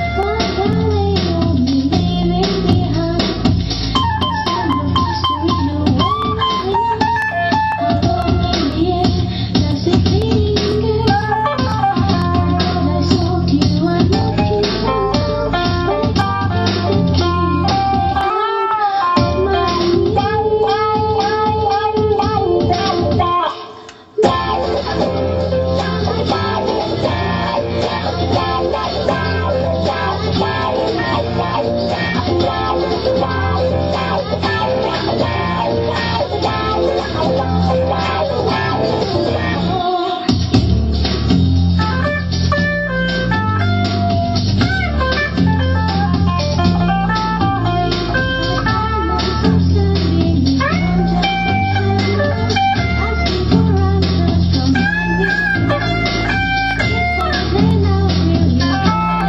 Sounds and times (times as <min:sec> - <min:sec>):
Music: 0:00.0 - 0:59.2.